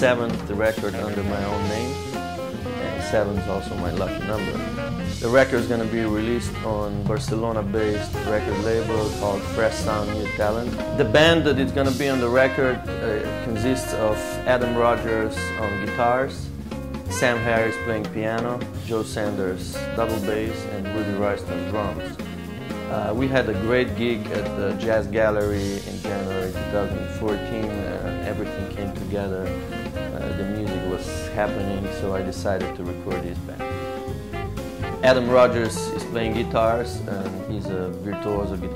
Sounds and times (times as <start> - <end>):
Speech: 0.0 - 2.0, 2.6 - 16.5, 17.1 - 22.2, 22.9 - 33.8, 35.0 - 38.7
Music: 0.0 - 38.7.